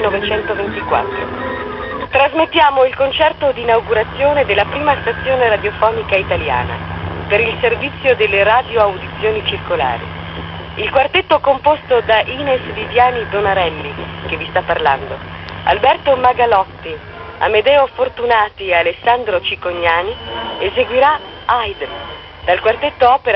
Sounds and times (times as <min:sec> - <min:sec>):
Speech: 0:00.0 - 0:01.1, 0:02.2 - 0:10.0, 0:10.8 - 0:21.9, 0:22.5 - 0:23.3
Radio: 0:00.0 - 0:01.3, 0:02.0 - 0:23.3.